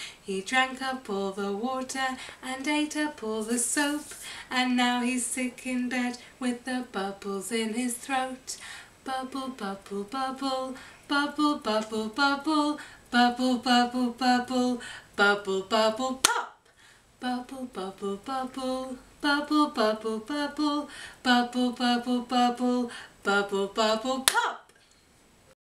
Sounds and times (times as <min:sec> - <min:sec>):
Female singing: 0:00.0 - 0:16.6, 0:17.2 - 0:24.7.